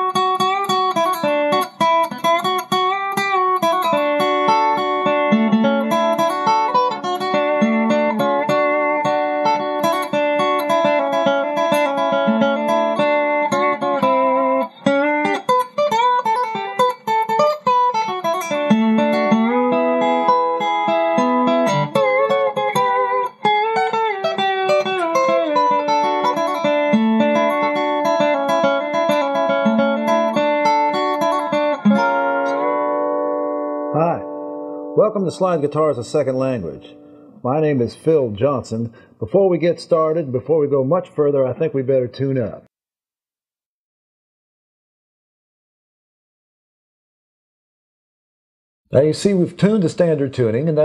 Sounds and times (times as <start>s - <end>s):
Music: 0.0s - 37.5s
Speech: 34.0s - 34.3s, 35.0s - 42.7s, 48.9s - 50.8s.